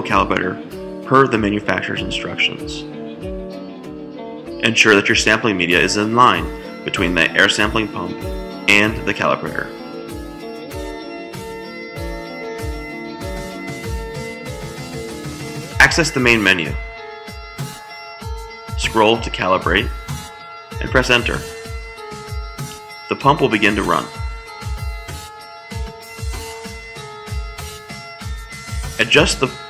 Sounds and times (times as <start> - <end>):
Speech: 0.0 - 2.8, 4.6 - 9.7, 15.8 - 16.8, 18.8 - 19.9, 20.8 - 21.5, 23.1 - 24.1, 29.0 - 29.6
Music: 0.0 - 29.6.